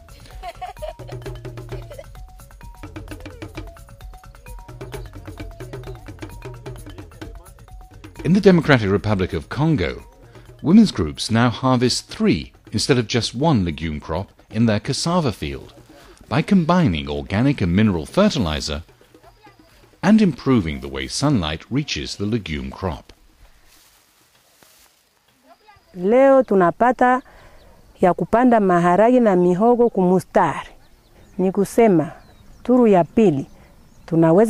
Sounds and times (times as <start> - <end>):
Narration, monologue: 1.7 - 23.7, 25.4 - 34.4.